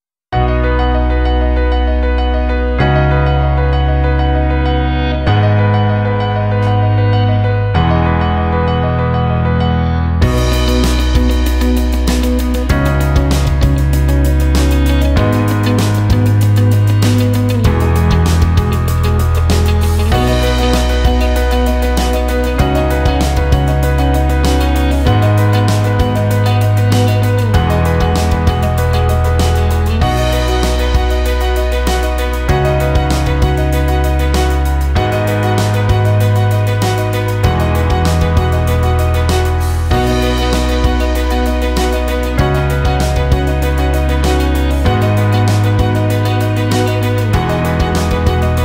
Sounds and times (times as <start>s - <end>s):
Music: 0.3s - 48.6s.